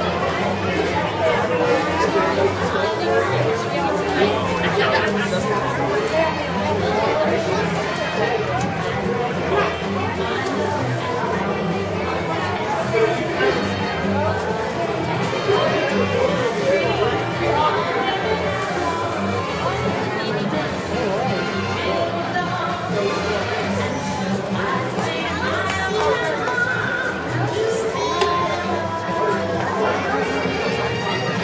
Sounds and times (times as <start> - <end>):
Music: 0.0 - 31.4
Speech: 0.0 - 31.4.